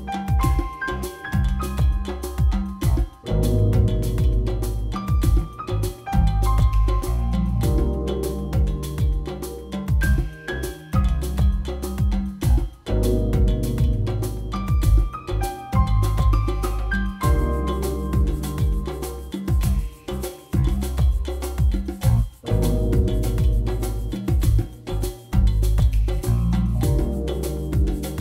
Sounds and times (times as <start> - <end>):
Music: 0.0 - 28.2.